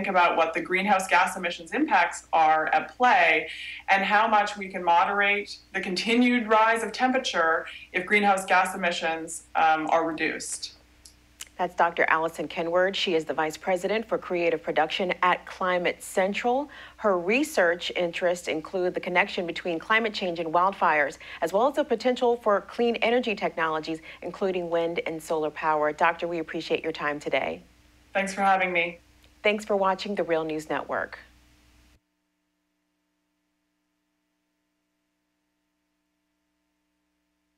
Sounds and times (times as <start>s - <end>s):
Speech: 0.0s - 10.8s, 11.4s - 27.6s, 28.2s - 31.3s.